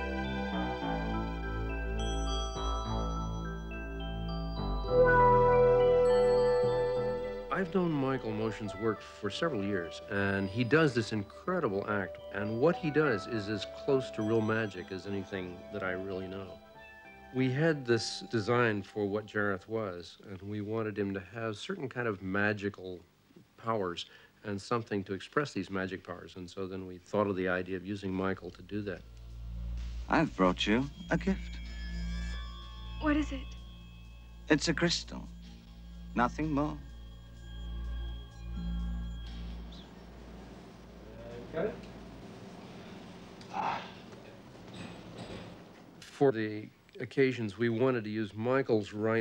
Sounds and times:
Speech: 0:07.5 - 0:16.5, 0:17.4 - 0:23.0, 0:23.6 - 0:29.0, 0:46.0 - 0:49.2.

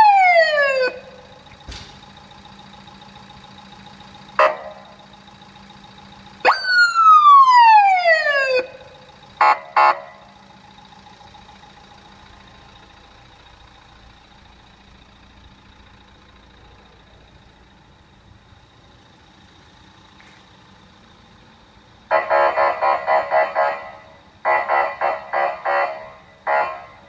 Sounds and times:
Police car (siren): 0:00.0 - 0:01.5, 0:04.2 - 0:05.4, 0:06.4 - 0:13.0, 0:22.1 - 0:27.0.

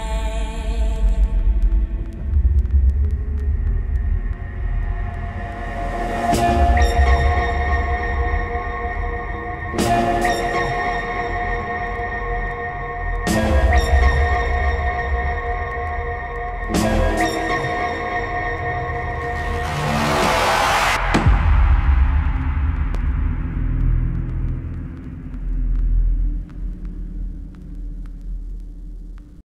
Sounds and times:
Music: 0:00.0 - 0:29.4.

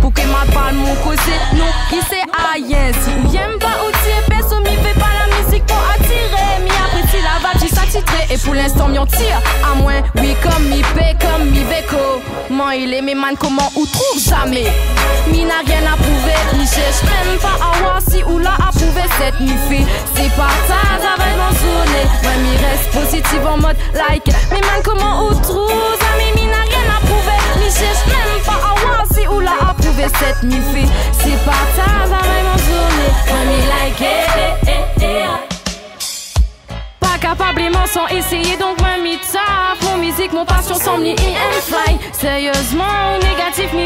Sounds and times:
Hip hop music: 0:00.0 - 0:43.8
Pop music: 0:00.0 - 0:43.8.

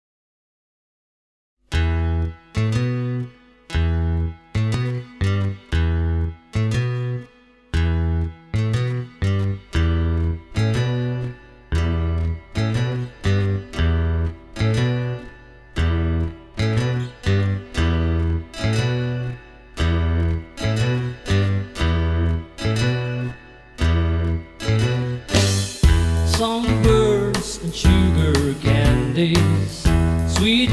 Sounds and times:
Music: 0:01.6 - 0:30.7.

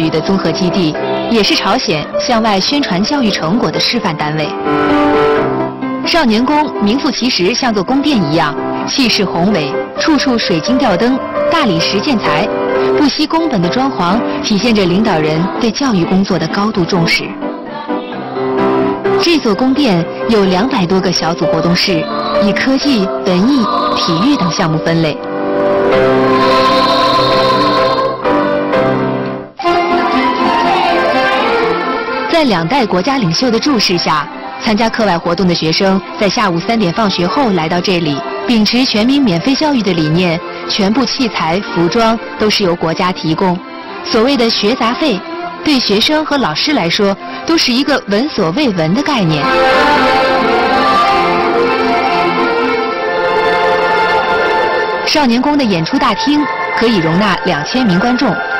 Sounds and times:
Speech: 0:00.0 - 0:04.6, 0:06.1 - 0:17.4, 0:19.2 - 0:25.2, 0:32.3 - 0:49.5, 0:55.1 - 0:58.4
Music: 0:00.0 - 0:58.5.

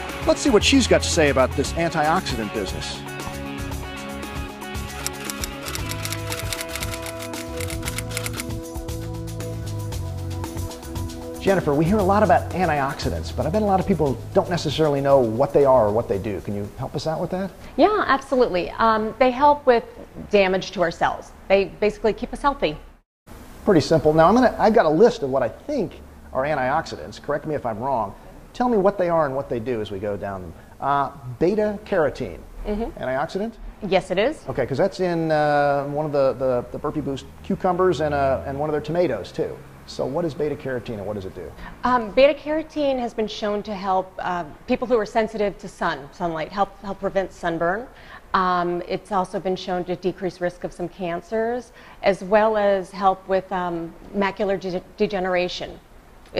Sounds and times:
Music: 0:00.0 - 0:16.7
Speech: 0:11.4 - 0:22.8, 0:23.7 - 0:55.8.

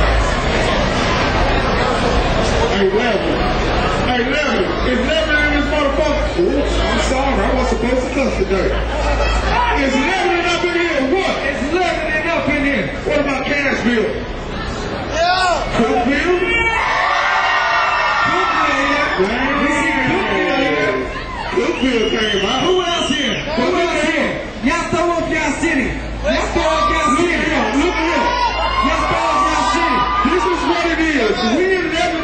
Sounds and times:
Speech: 0:00.8 - 0:16.9, 0:18.2 - 0:32.2.

